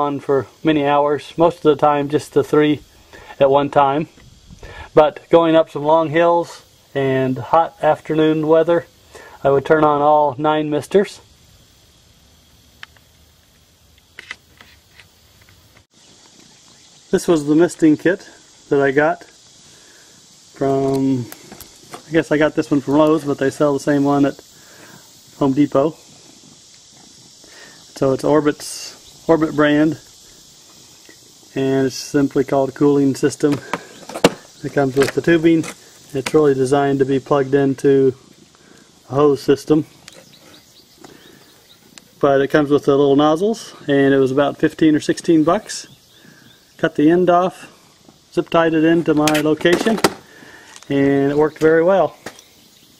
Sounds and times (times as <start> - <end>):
Speech: 0.0 - 2.8, 3.4 - 4.1, 4.9 - 11.2, 17.1 - 19.3, 20.6 - 21.3, 22.1 - 24.4, 25.4 - 26.0, 28.0 - 30.0, 31.5 - 33.7, 34.6 - 38.2, 39.1 - 39.9, 42.2 - 45.9, 46.8 - 47.7, 48.3 - 50.1, 50.9 - 52.2
Outside, rural or natural: 0.0 - 52.9.